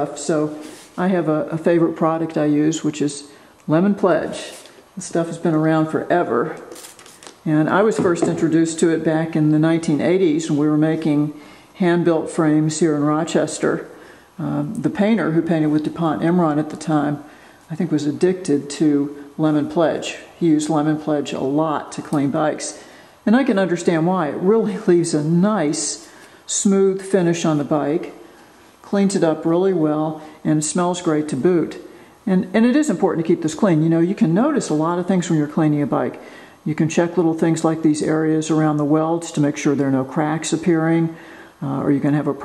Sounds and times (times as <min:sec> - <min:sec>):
Speech: 0:00.0 - 0:06.7, 0:07.4 - 0:28.2, 0:28.8 - 0:42.4.